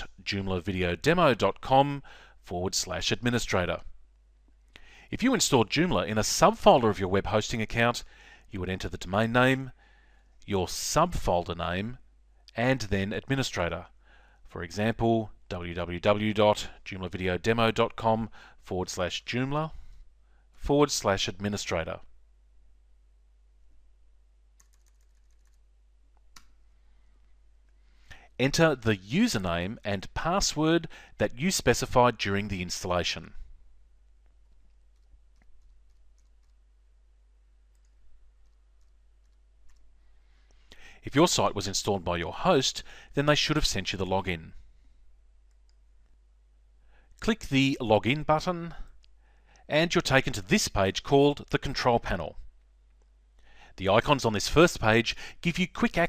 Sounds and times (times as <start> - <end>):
Speech: 0.0 - 3.9, 5.1 - 9.8, 10.5 - 13.9, 14.5 - 19.8, 20.6 - 22.1, 28.4 - 33.4, 41.0 - 44.6, 47.2 - 48.9, 49.7 - 52.5, 53.8 - 56.0
Typing: 24.6 - 25.6, 34.4 - 36.6.